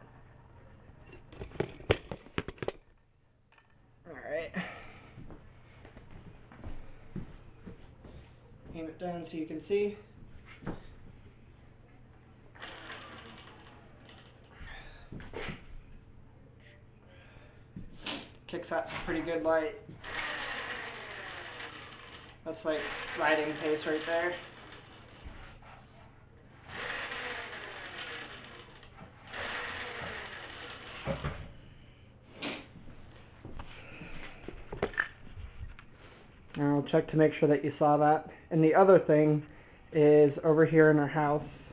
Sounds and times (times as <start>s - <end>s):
Bicycle: 12.6s - 14.8s, 20.0s - 25.6s, 26.6s - 31.6s.